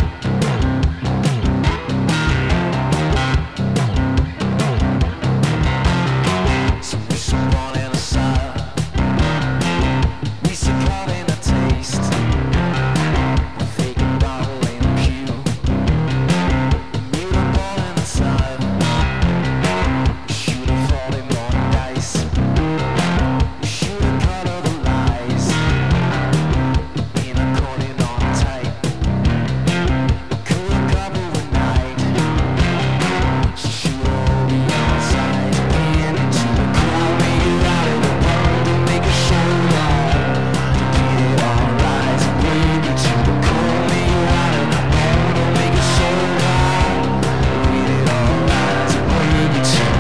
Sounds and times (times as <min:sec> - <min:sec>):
Music: 0:00.0 - 0:50.0.